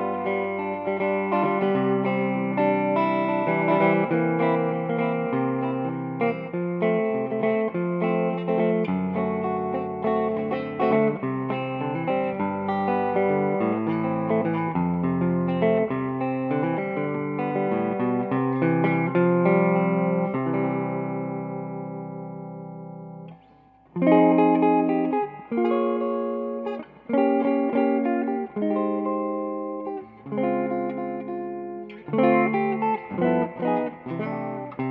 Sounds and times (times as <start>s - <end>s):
Guitar: 0.0s - 34.9s.